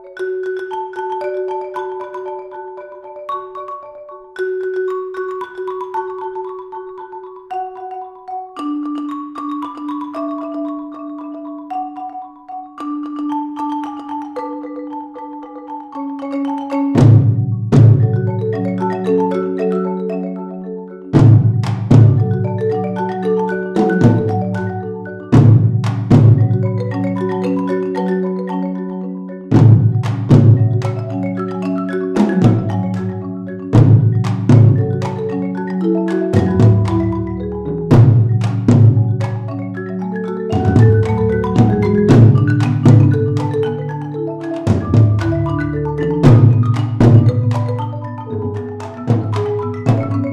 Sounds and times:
Percussion: 0.0s - 50.3s.

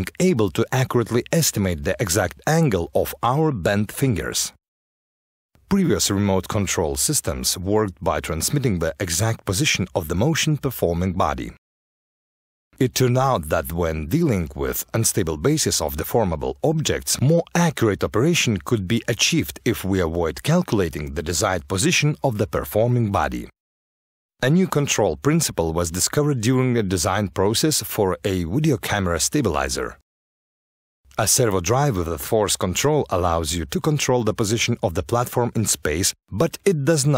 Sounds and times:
Speech: 0.0s - 4.6s, 5.7s - 11.6s, 12.8s - 23.5s, 24.4s - 30.0s, 31.1s - 37.1s.

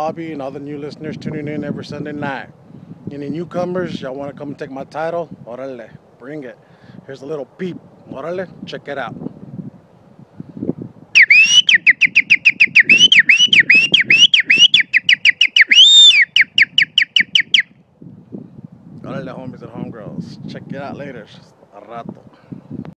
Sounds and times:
Whistle: 11.2s - 17.8s.

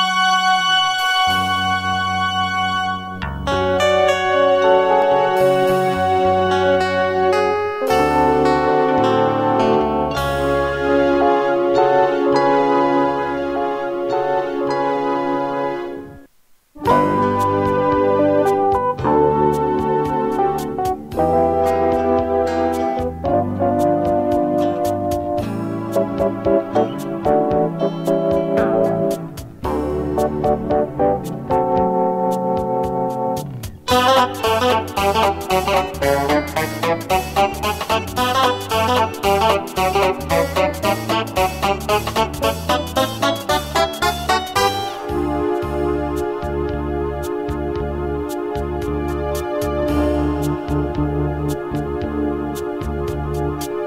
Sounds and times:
Funk: 16.8s - 53.8s.

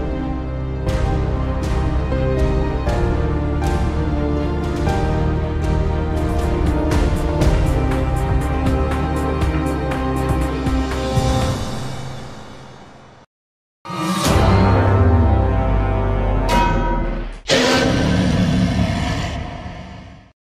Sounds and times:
Music: 0.0s - 13.3s, 13.9s - 19.8s.

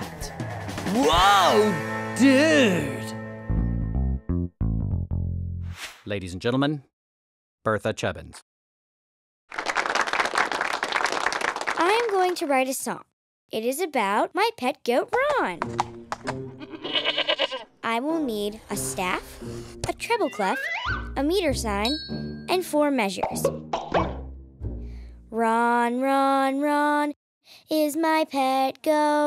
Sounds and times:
Music: 0.0s - 5.7s, 15.2s - 16.8s, 17.9s - 25.3s
Child speech, kid speaking: 11.8s - 15.6s, 17.8s - 23.4s, 25.3s - 29.2s.

